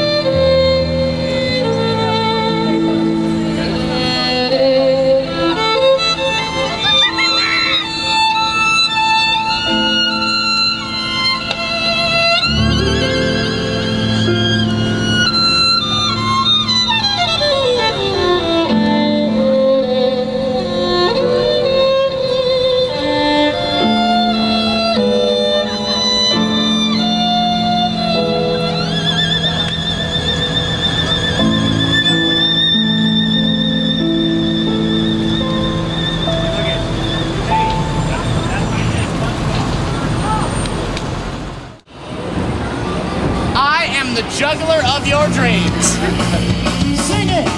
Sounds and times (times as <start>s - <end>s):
Music: 0.0s - 39.0s, 43.8s - 47.5s.